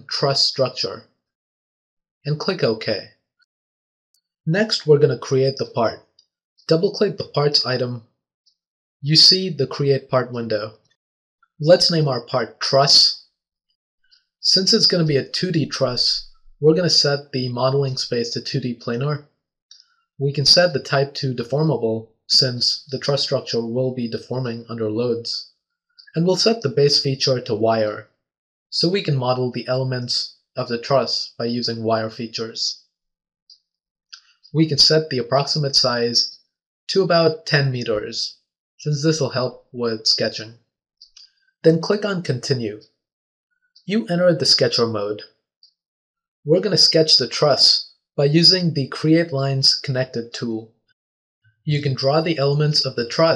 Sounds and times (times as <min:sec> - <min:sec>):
Speech: 0:00.0 - 0:01.0, 0:02.3 - 0:03.1, 0:04.5 - 0:06.0, 0:06.7 - 0:08.0, 0:09.0 - 0:10.8, 0:11.6 - 0:13.2, 0:14.4 - 0:19.2, 0:20.2 - 0:25.4, 0:26.0 - 0:28.0, 0:28.7 - 0:32.8, 0:34.5 - 0:40.6, 0:41.6 - 0:42.8, 0:43.9 - 0:45.2, 0:46.5 - 0:50.7, 0:51.7 - 0:53.3.